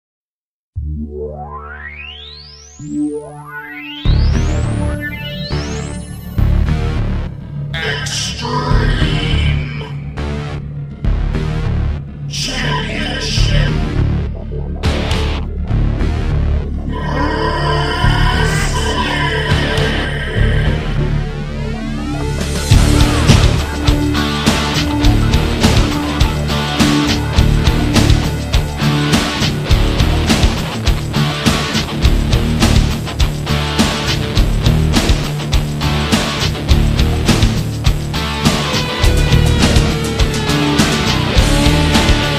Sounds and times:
Music: 0.8s - 42.3s.

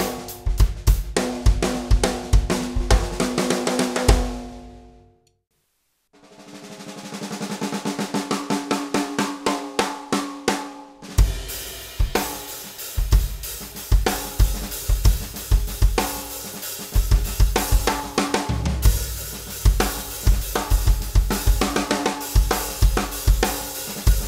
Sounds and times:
Drum: 0.0s - 4.8s, 6.2s - 24.2s.

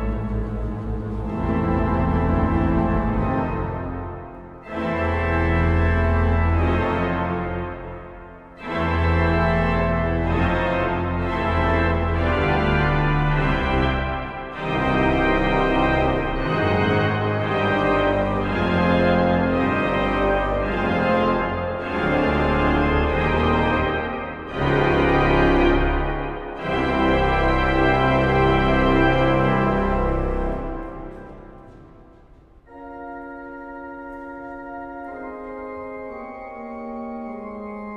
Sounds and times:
Keyboard (musical): 0.0s - 37.9s.

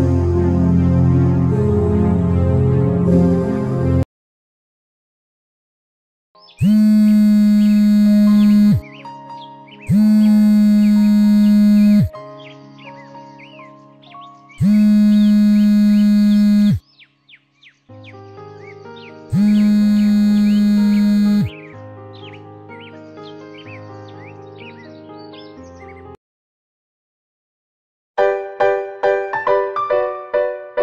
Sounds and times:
Music: 0.0s - 4.0s, 6.4s - 26.2s, 28.2s - 30.8s.

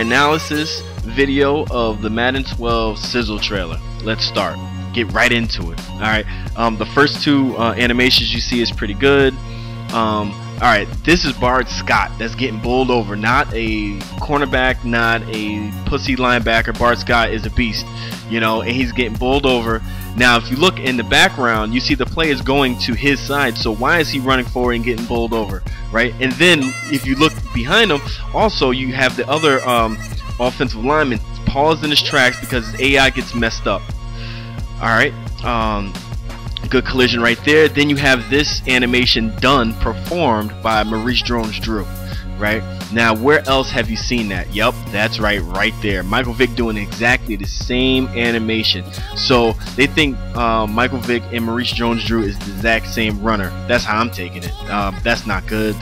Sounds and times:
Speech: 0.0s - 33.8s, 34.8s - 36.0s, 36.6s - 55.8s
Music: 0.0s - 55.8s.

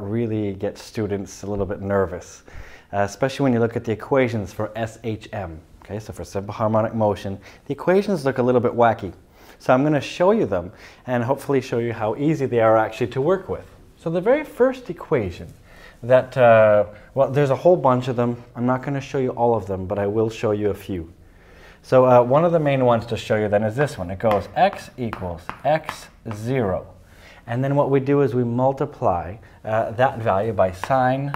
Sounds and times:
Speech: 0.0s - 21.2s, 21.8s - 31.3s.

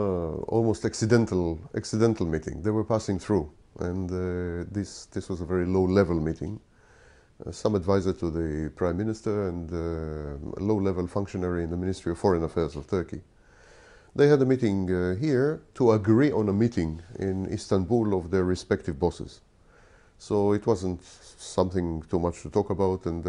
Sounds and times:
Speech: 0.0s - 6.7s, 7.4s - 13.3s, 14.2s - 19.4s, 20.2s - 23.2s.

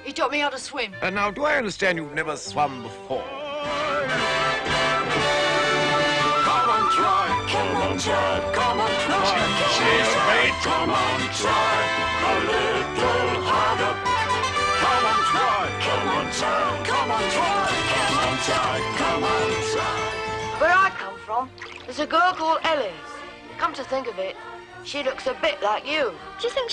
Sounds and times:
Music: 0.0s - 26.7s.

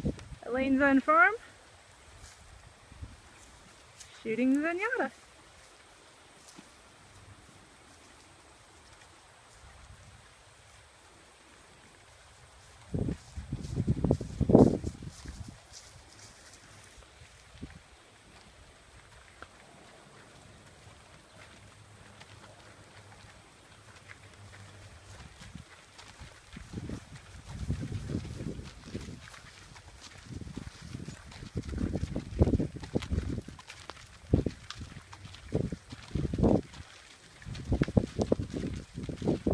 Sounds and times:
Horse: 0.0s - 39.5s
Outside, rural or natural: 0.0s - 39.5s.

